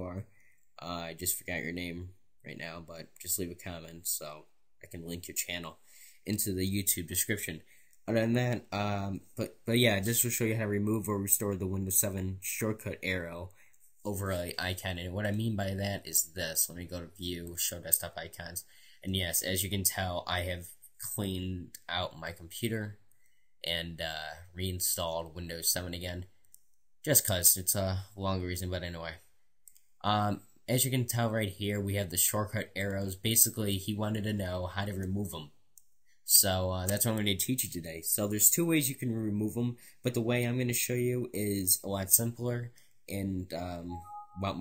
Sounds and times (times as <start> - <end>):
Speech: 0.0 - 23.0, 23.6 - 26.3, 27.0 - 29.3, 30.0 - 35.6, 36.3 - 44.6.